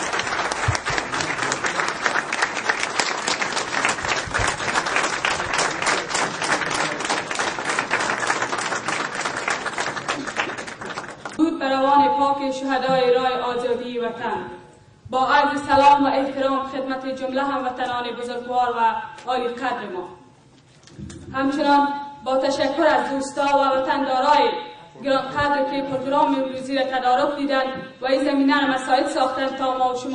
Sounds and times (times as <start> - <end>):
Female speech, woman speaking: 11.4 - 20.2, 21.4 - 30.1
Narration, monologue: 11.4 - 30.1.